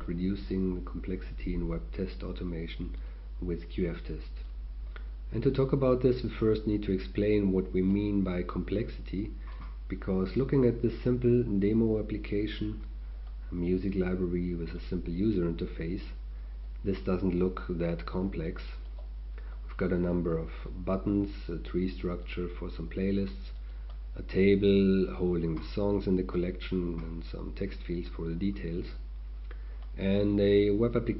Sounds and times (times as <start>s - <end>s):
Speech: 0.0s - 4.6s, 5.3s - 12.9s, 13.5s - 16.2s, 16.8s - 18.9s, 19.7s - 23.6s, 24.2s - 29.1s, 30.0s - 31.1s.